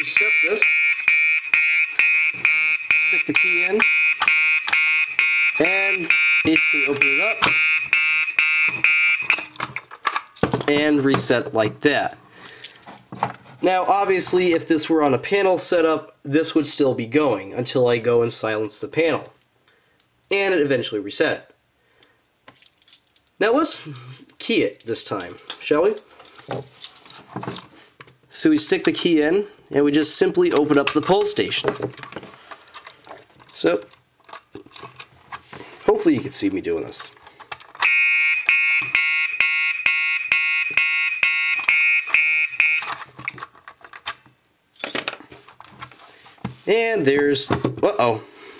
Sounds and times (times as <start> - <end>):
Speech: 0.0 - 0.6, 3.1 - 3.8, 5.6 - 7.4, 10.7 - 12.2, 13.6 - 19.4, 20.3 - 21.6, 23.4 - 26.0, 28.3 - 31.8, 33.6 - 33.9, 35.9 - 37.2, 46.7 - 48.3
Fire alarm: 0.0 - 9.5, 37.8 - 43.0.